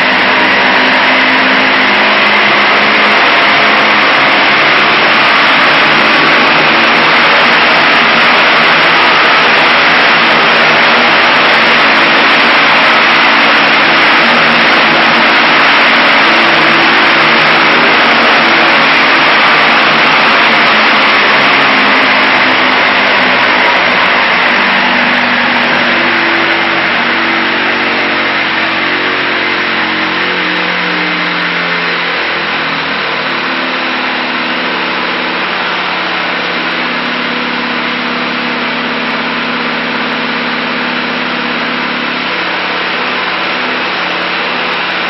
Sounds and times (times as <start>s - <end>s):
Engine: 0.0s - 45.0s.